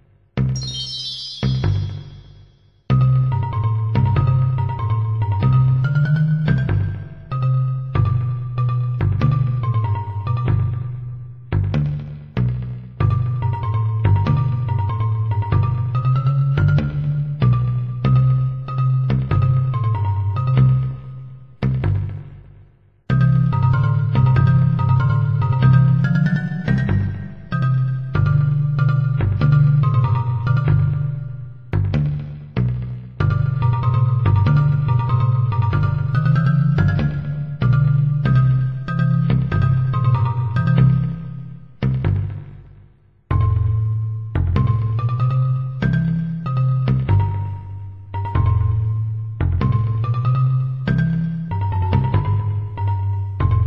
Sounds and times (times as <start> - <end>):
Music: 0.0 - 53.6.